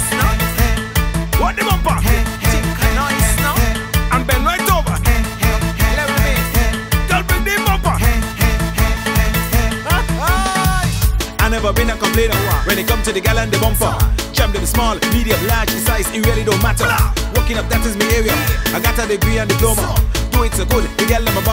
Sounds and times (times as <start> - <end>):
Music: 0.0 - 21.5.